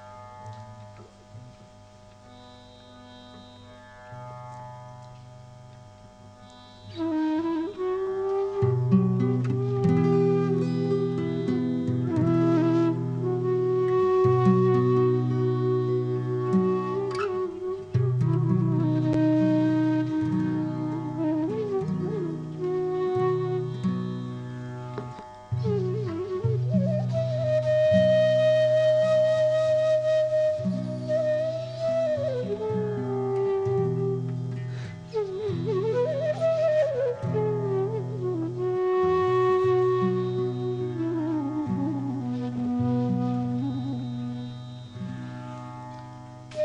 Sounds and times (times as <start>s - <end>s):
Flute: 0.0s - 4.8s, 6.2s - 46.6s.